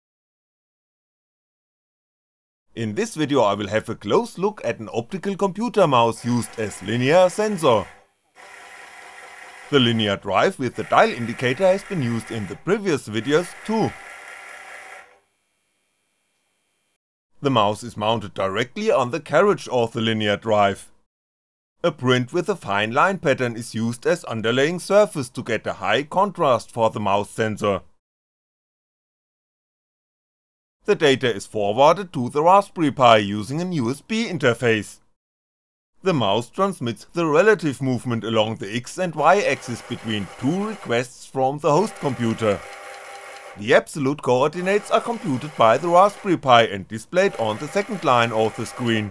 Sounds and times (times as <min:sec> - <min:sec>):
Speech: 0:02.8 - 0:07.9, 0:09.7 - 0:14.0, 0:17.4 - 0:21.0, 0:21.8 - 0:27.9, 0:30.9 - 0:35.0, 0:36.0 - 0:42.6, 0:43.6 - 0:49.1.